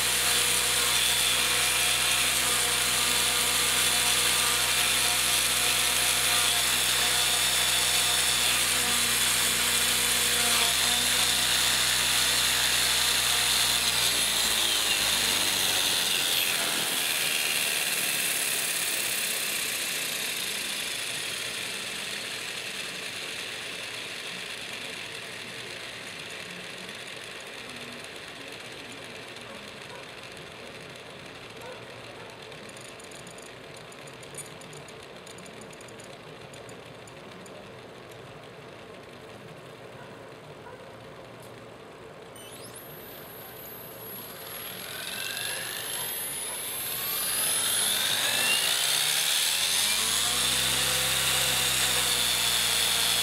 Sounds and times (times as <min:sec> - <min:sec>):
Drill: 0:00.0 - 0:37.6, 0:42.4 - 0:53.2
Outside, urban or manmade: 0:00.0 - 0:53.2.